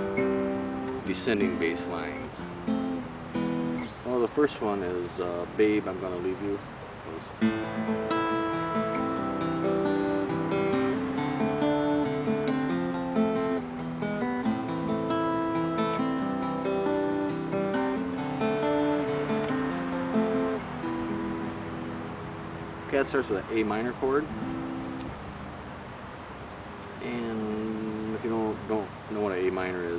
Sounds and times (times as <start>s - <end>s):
Acoustic guitar: 0.0s - 29.9s
Speech: 1.0s - 2.4s, 4.0s - 7.4s, 22.9s - 24.3s, 27.0s - 29.9s.